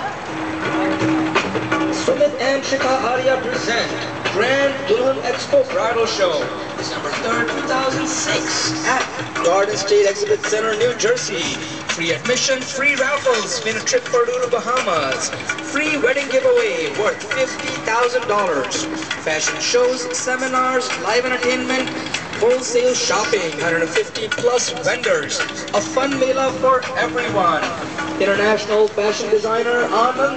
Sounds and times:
Music: 0.0s - 30.3s
Speech: 2.0s - 8.5s, 9.5s - 30.3s.

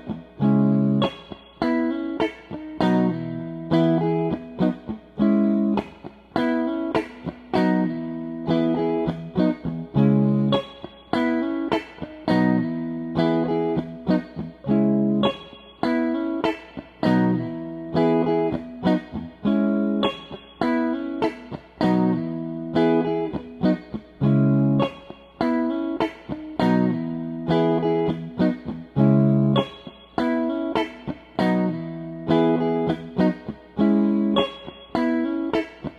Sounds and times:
Electric guitar: 0.0s - 35.9s.

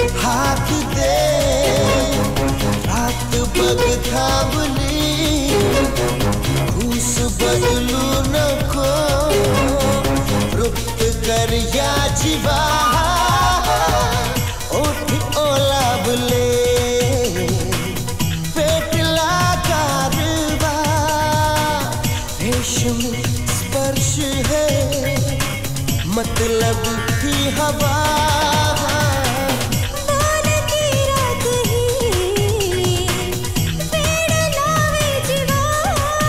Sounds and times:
Music of Bollywood: 0.0s - 36.2s.

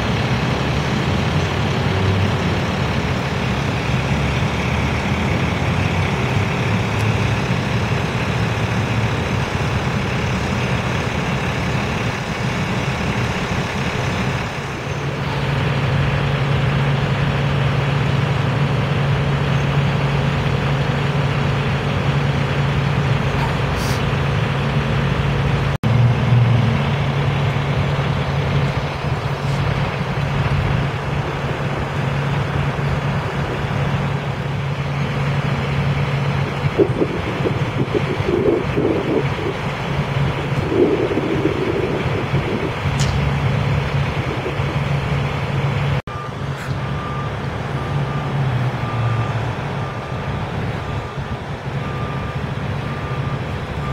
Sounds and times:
Outside, urban or manmade: 0.0s - 53.9s
Truck: 0.0s - 53.9s.

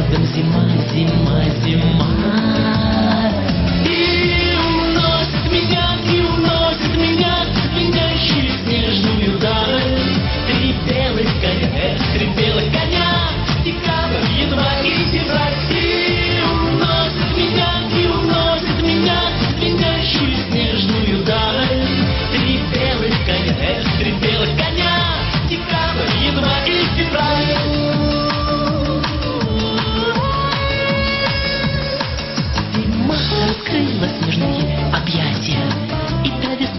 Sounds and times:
Music: 0.0s - 36.7s.

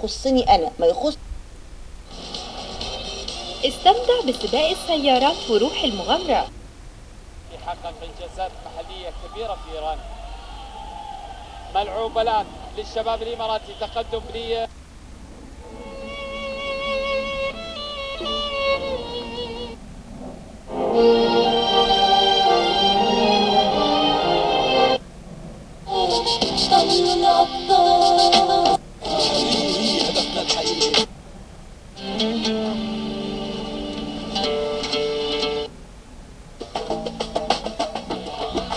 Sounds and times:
Television: 0.0s - 25.2s, 25.9s - 35.8s, 36.6s - 38.7s
Music: 2.1s - 6.5s, 15.8s - 19.8s, 20.7s - 25.0s, 25.9s - 31.1s, 32.0s - 35.7s, 36.6s - 38.7s.

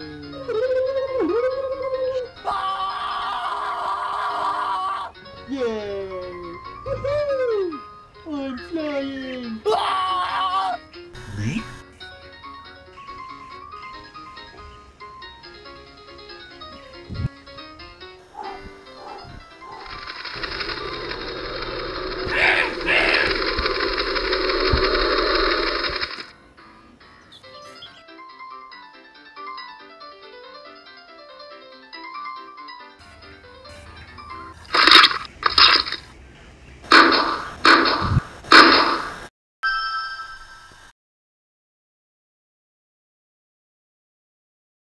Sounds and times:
Music: 0.0s - 35.3s
Outside, rural or natural: 18.2s - 26.6s, 34.5s - 40.9s.

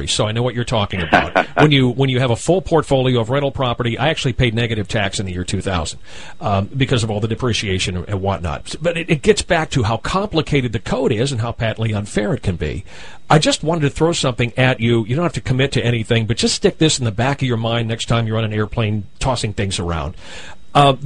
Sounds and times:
Speech: 0.0s - 21.0s.

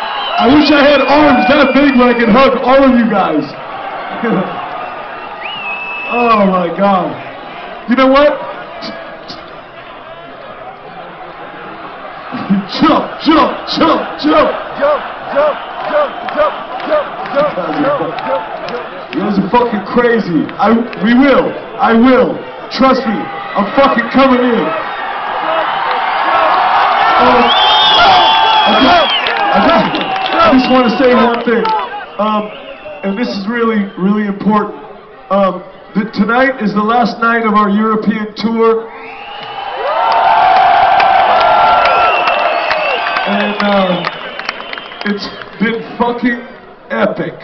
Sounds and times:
Male speech, man speaking: 0.4s - 3.6s, 4.2s - 4.6s, 6.1s - 7.2s, 7.9s - 9.0s, 12.4s - 18.4s, 19.2s - 24.8s, 27.2s - 38.8s, 43.2s - 44.1s, 45.0s - 47.4s.

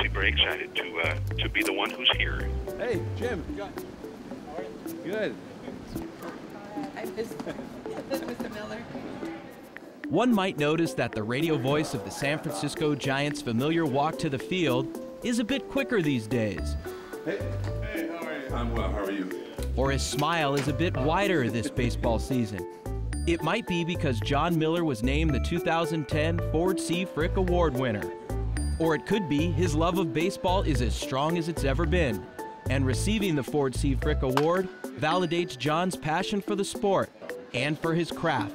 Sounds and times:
Speech: 0.0s - 3.7s, 10.1s - 16.6s, 17.3s - 22.6s, 23.3s - 28.1s, 28.8s - 38.5s
Music: 0.0s - 38.5s
Inside, public space: 5.4s - 13.9s.

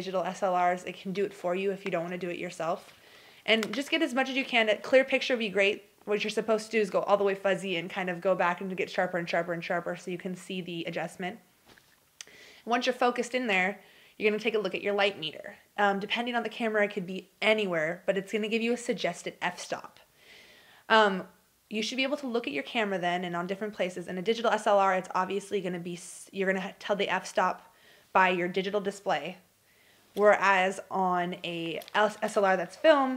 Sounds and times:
Speech: 0.0s - 2.9s, 3.5s - 11.4s, 12.7s - 20.0s, 20.9s - 29.4s, 30.2s - 33.1s.

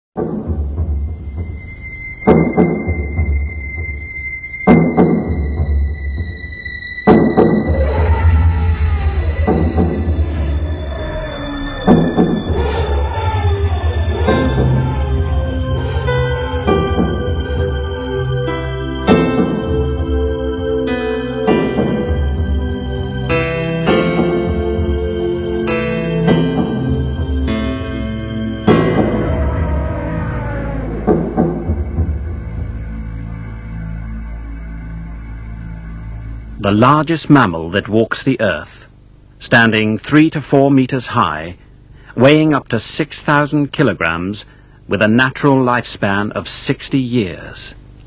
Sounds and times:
Music: 0.2s - 36.8s
Animal: 7.6s - 16.7s, 28.8s - 32.0s.

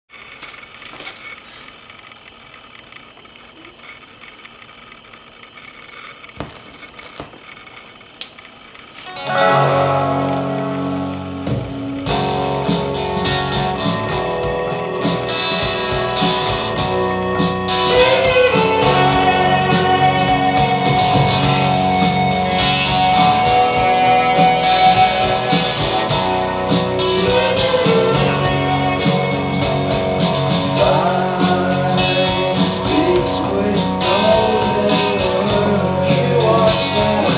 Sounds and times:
Music: 9.1s - 37.3s.

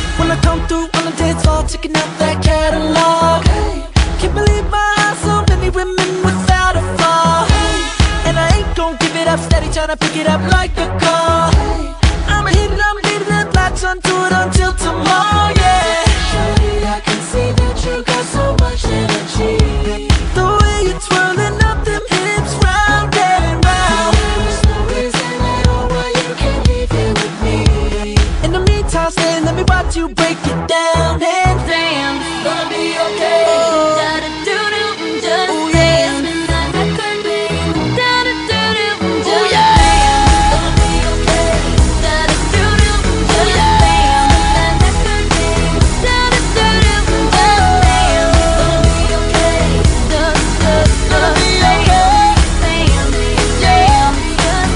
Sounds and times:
Pop music: 0.0s - 54.7s.

